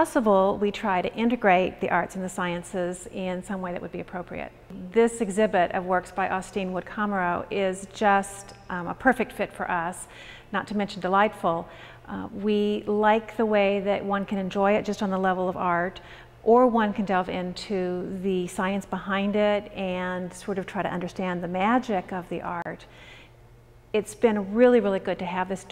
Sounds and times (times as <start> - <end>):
Speech: 0.0 - 22.9, 24.0 - 25.7.